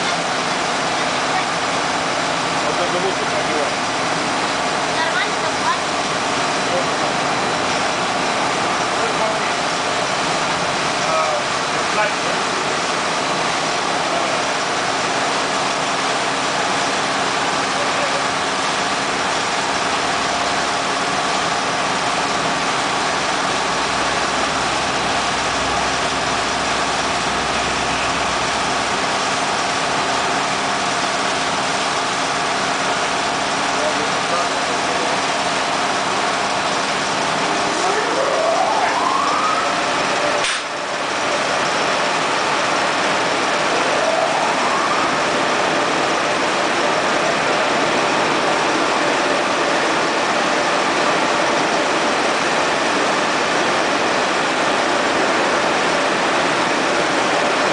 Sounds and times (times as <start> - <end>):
Speech: 2.6 - 3.8, 33.8 - 35.2.